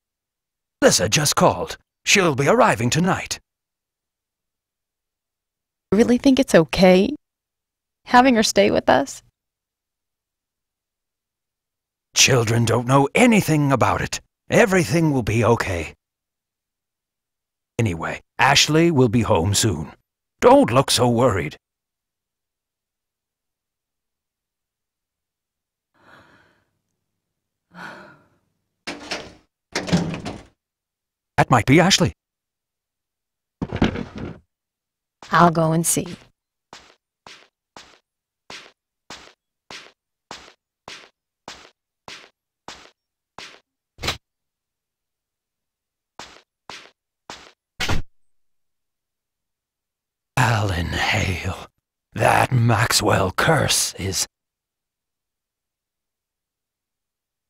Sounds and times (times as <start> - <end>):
Speech: 0.8 - 3.4, 6.0 - 7.2, 8.1 - 9.2, 12.2 - 16.0, 17.8 - 21.6, 31.4 - 32.2, 35.3 - 36.2, 50.4 - 54.3.